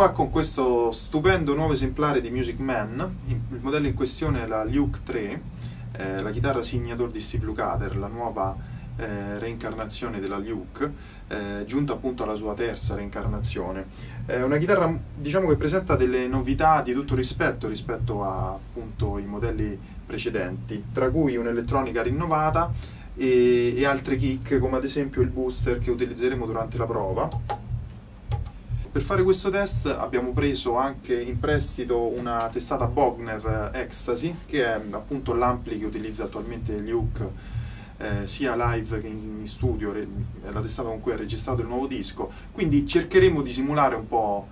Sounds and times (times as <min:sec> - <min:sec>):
Speech: 0:00.0 - 0:27.4, 0:28.9 - 0:37.4, 0:38.0 - 0:44.5.